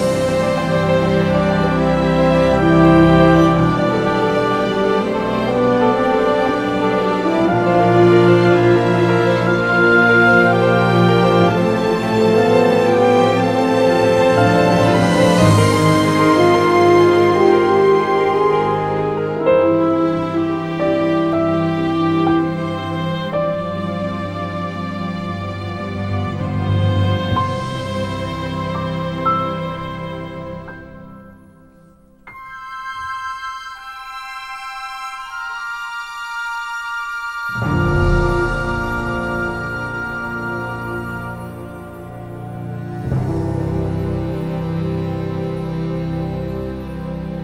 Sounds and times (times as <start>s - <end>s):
Theme music: 0.0s - 47.4s.